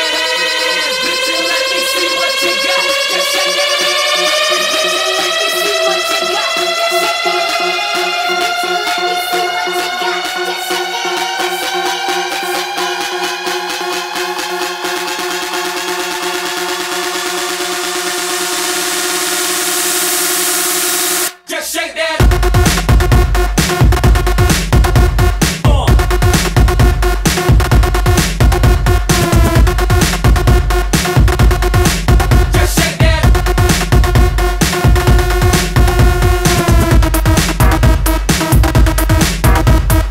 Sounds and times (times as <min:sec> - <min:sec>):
Music: 0:00.0 - 0:21.4, 0:22.2 - 0:40.1.